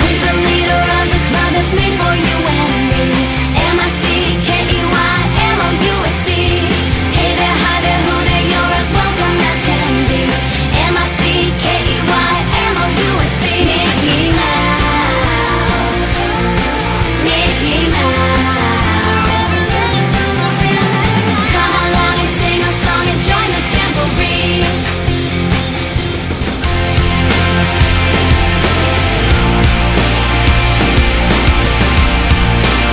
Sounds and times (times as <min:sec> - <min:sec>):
Music: 0:00.0 - 0:32.9.